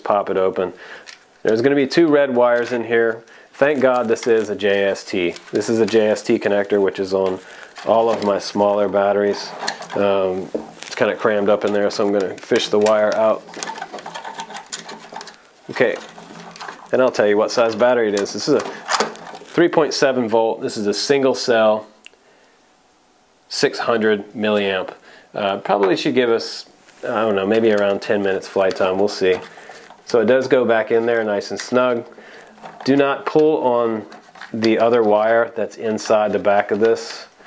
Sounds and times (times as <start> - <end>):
Speech: 0.0 - 0.8, 1.4 - 13.6, 15.7 - 16.1, 16.9 - 18.8, 19.5 - 22.0, 23.5 - 32.1, 32.8 - 37.4
Inside, small room: 0.0 - 37.4.